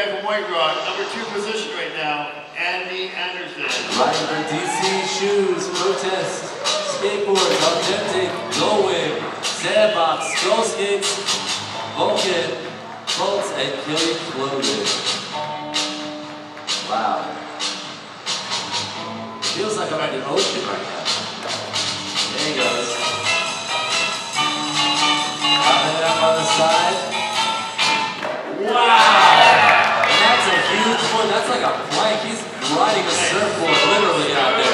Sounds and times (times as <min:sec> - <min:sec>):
Speech: 0:00.0 - 0:11.1, 0:12.0 - 0:12.6, 0:19.5 - 0:21.0, 0:30.1 - 0:34.7
Music: 0:03.6 - 0:34.7.